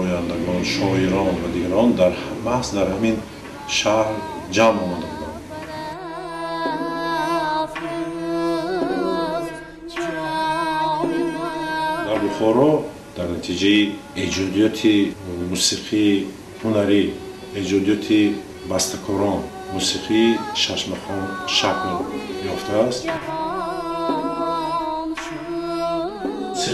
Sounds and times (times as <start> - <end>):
Speech: 0.0 - 5.4, 12.1 - 23.2
Middle Eastern music: 0.0 - 26.7
Music of Asia: 0.0 - 26.7
Singing: 0.0 - 26.7
Vocal music: 0.0 - 26.7.